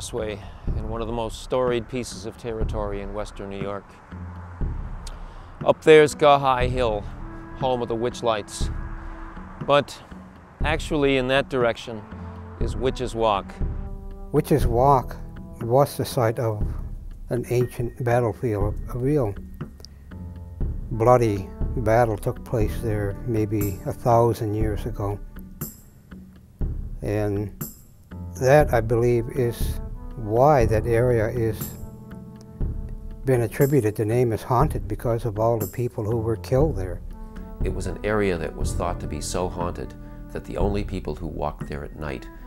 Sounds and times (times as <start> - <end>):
Speech: 0.0 - 3.8, 5.6 - 8.7, 9.6 - 10.0, 10.6 - 12.0, 12.6 - 13.6, 14.4 - 19.4, 20.9 - 25.2, 27.0 - 27.6, 28.4 - 31.8, 33.3 - 37.0, 37.6 - 42.3
Music: 0.0 - 42.4.